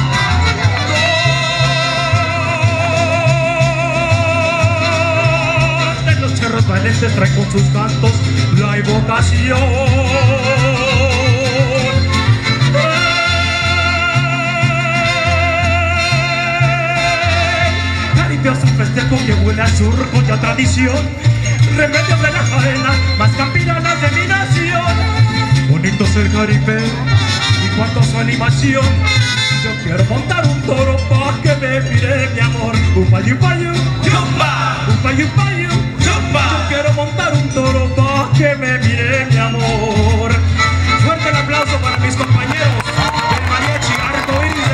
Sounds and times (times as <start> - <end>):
Yodeling: 0.0 - 6.0, 9.5 - 17.8
Music: 0.0 - 44.7
Outside, urban or manmade: 0.0 - 44.7.